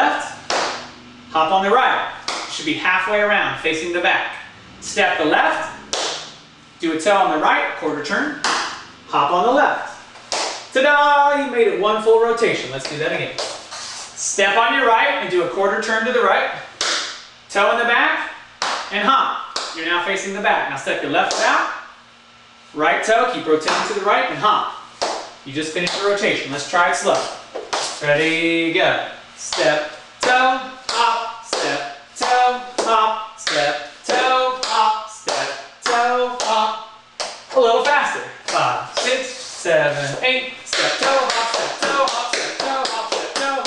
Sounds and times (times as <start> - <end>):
Speech: 0.0 - 0.4, 1.3 - 6.0, 6.8 - 8.5, 9.1 - 10.0, 10.7 - 13.4, 14.2 - 16.7, 17.5 - 21.9, 22.7 - 24.8, 25.5 - 27.4, 28.0 - 36.9, 37.5 - 43.6.